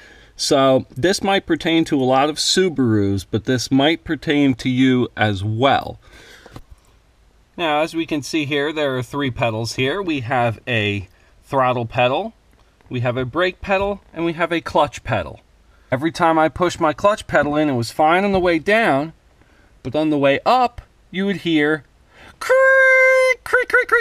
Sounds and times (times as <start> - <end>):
Speech: 0.4 - 6.0, 7.6 - 19.2, 19.8 - 24.0.